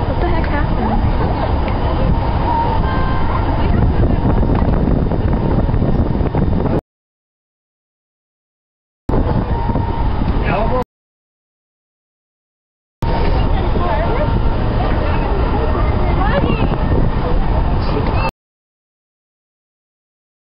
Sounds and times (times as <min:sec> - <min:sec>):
Speech: 0:00.1 - 0:01.1, 0:10.4 - 0:10.8, 0:13.1 - 0:18.3.